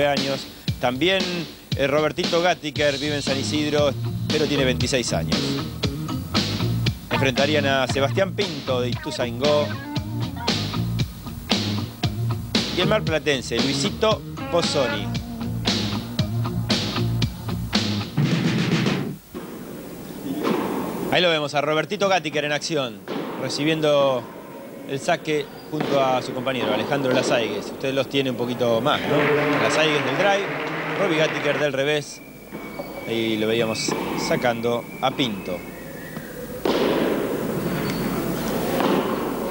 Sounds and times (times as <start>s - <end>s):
Speech: 0.0s - 5.5s, 7.1s - 10.6s, 12.8s - 15.1s, 20.2s - 24.2s, 24.9s - 32.2s, 33.1s - 35.6s.